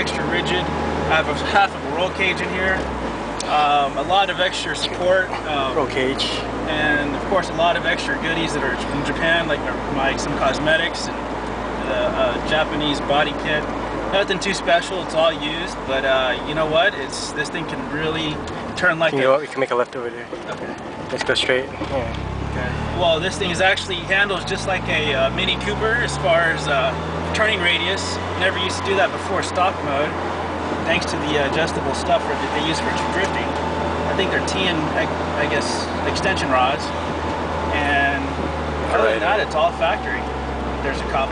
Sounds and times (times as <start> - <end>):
Speech: 0.0 - 11.2, 11.8 - 20.5, 21.1 - 30.2, 30.9 - 33.5, 34.1 - 36.9, 37.7 - 41.3
Car: 0.0 - 41.3
Outside, urban or manmade: 0.0 - 41.3.